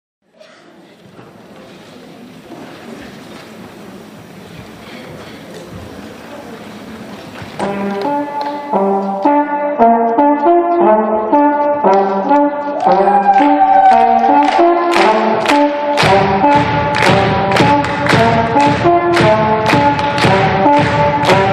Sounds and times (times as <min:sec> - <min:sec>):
Inside, large room or hall: 0:00.2 - 0:21.5
Music: 0:05.6 - 0:21.5.